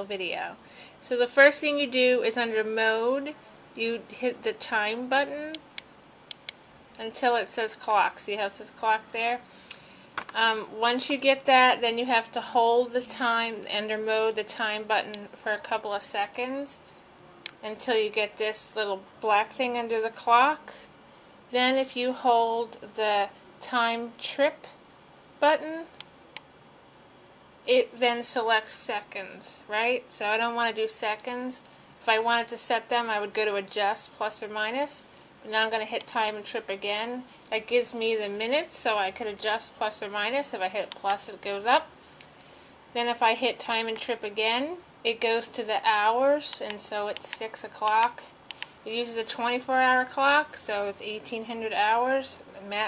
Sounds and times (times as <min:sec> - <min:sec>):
Speech: 0:00.0 - 0:05.6, 0:07.0 - 0:09.4, 0:10.3 - 0:16.8, 0:17.6 - 0:20.9, 0:21.5 - 0:24.8, 0:25.4 - 0:26.0, 0:27.7 - 0:41.9, 0:43.0 - 0:48.3, 0:48.9 - 0:52.8.